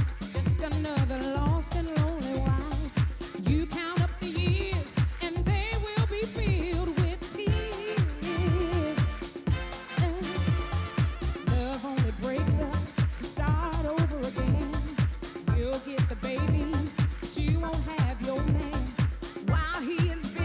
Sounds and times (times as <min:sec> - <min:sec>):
Music: 0:00.0 - 0:20.4.